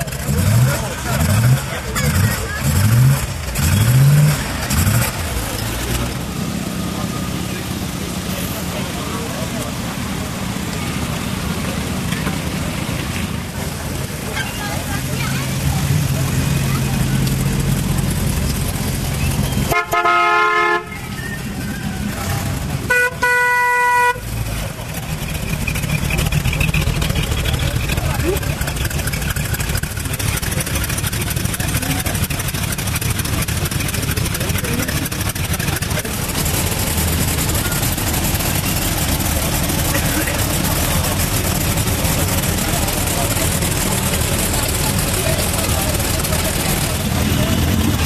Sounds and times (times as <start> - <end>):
Speech: 0.0 - 2.9, 6.8 - 18.0, 27.1 - 29.1, 30.1 - 32.8, 33.4 - 36.4, 39.3 - 48.0
Car: 0.0 - 48.0.